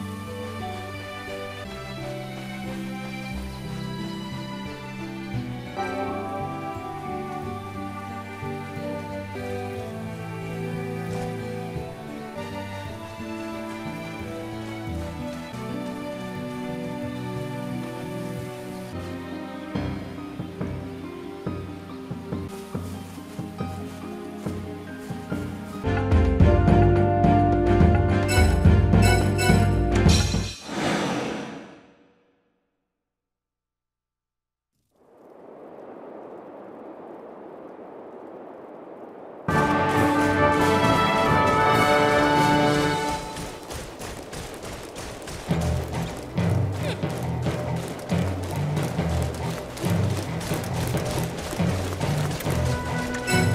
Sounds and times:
Music: 0.0s - 32.5s, 39.5s - 43.8s, 45.4s - 53.5s.

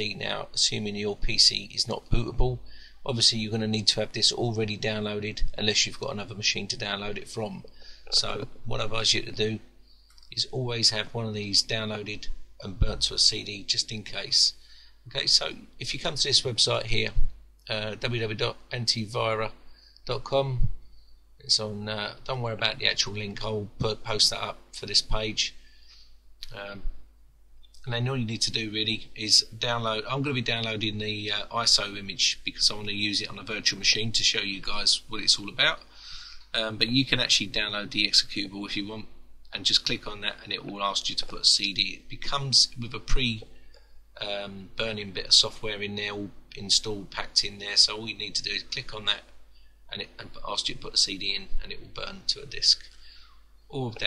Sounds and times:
Speech: 0.0s - 9.7s, 10.3s - 20.8s, 21.4s - 25.6s, 26.4s - 27.0s, 27.8s - 35.9s, 36.5s - 43.5s, 44.2s - 49.3s, 49.9s - 52.9s, 53.7s - 54.0s.

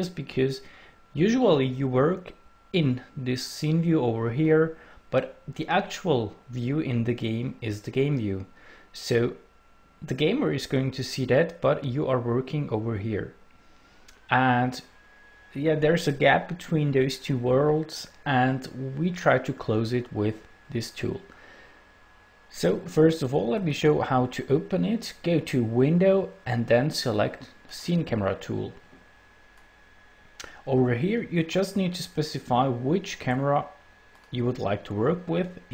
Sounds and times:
Speech: 0.0s - 13.4s, 14.3s - 14.9s, 15.5s - 21.3s, 22.5s - 28.8s, 30.4s - 35.7s.

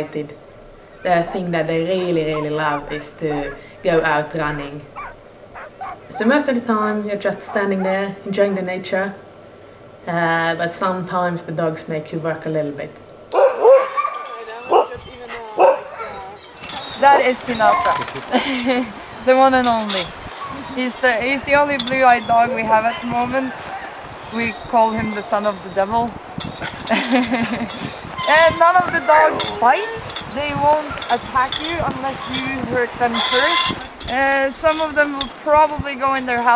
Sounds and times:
Speech: 0.0s - 0.4s, 1.1s - 4.9s, 6.1s - 9.2s, 10.1s - 13.0s, 14.2s - 16.4s, 17.0s - 23.7s, 24.3s - 26.2s, 27.2s - 36.5s.

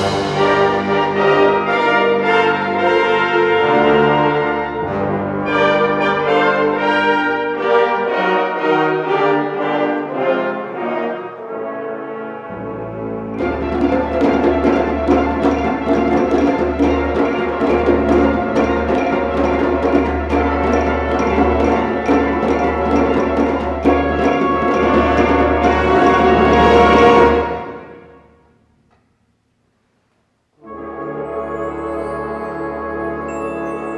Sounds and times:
Orchestra: 0.0s - 29.1s, 30.5s - 33.9s.

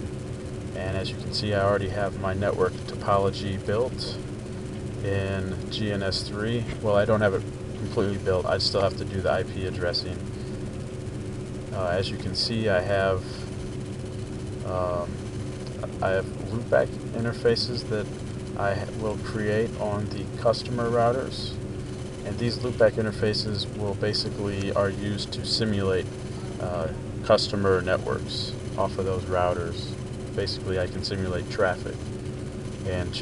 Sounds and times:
Static: 0.0s - 33.2s
Speech: 0.8s - 4.2s, 5.0s - 10.2s, 11.7s - 13.5s, 14.6s - 15.2s, 15.8s - 21.6s, 22.2s - 32.0s, 32.8s - 33.2s.

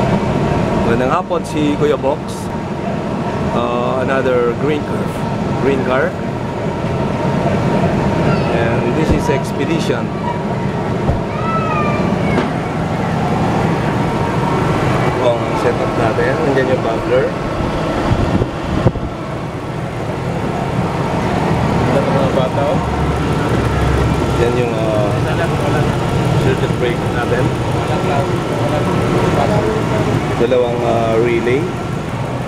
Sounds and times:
Speech: 0.8s - 2.5s, 3.6s - 6.2s, 8.4s - 10.1s, 15.2s - 17.4s, 24.4s - 31.7s.

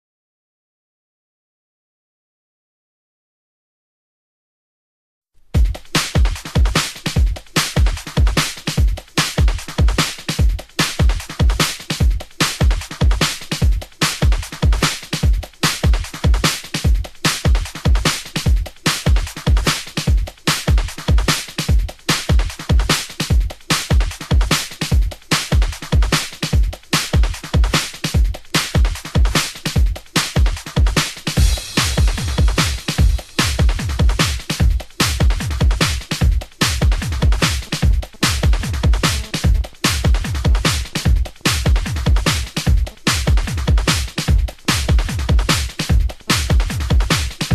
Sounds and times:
Drum and bass: 5.6s - 47.5s
House music: 5.6s - 47.5s.

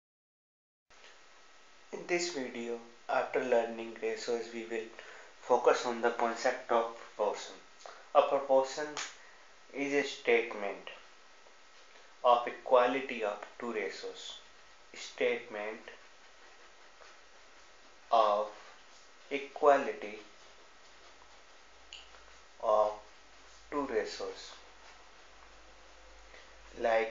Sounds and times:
Speech: 1.9s - 9.1s, 9.7s - 11.1s, 12.2s - 16.0s, 18.1s - 18.7s, 19.3s - 20.3s, 22.6s - 23.1s, 23.7s - 24.7s, 26.7s - 27.1s.

